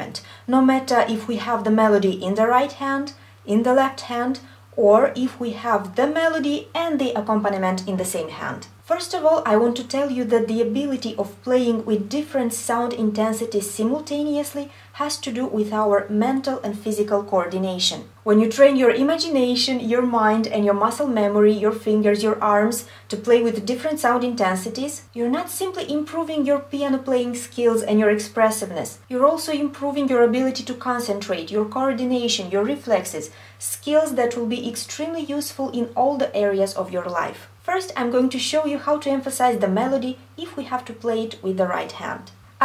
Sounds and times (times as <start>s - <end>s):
Speech: 0.0s - 42.6s.